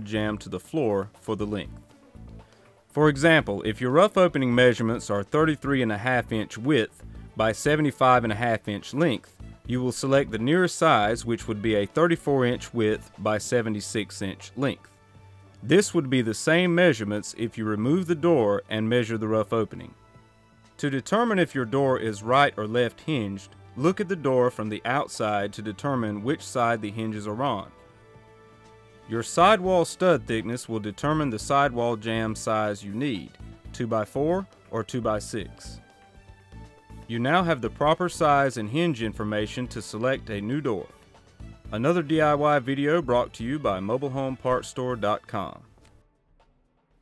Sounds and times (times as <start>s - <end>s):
Speech: 0.0s - 1.8s, 3.0s - 14.9s, 15.6s - 20.0s, 20.8s - 27.7s, 29.1s - 35.8s, 37.1s - 40.9s, 41.7s - 45.7s
Music: 0.0s - 47.0s.